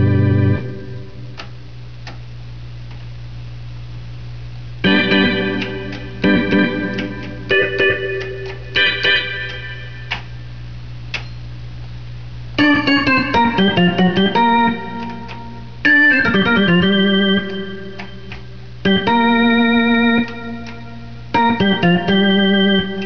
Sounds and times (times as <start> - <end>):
Hammond organ: 0.0 - 1.5, 4.8 - 10.6, 12.6 - 23.0.